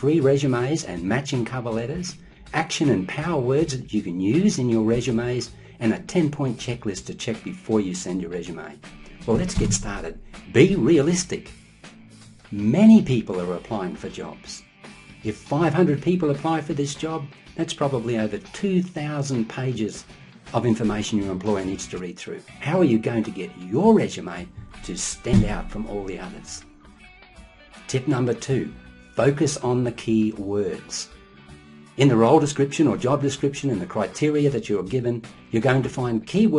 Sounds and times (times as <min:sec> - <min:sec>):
Speech: 0:00.0 - 0:11.5, 0:12.5 - 0:26.7, 0:27.9 - 0:31.1, 0:32.0 - 0:36.5
Music: 0:00.0 - 0:36.5.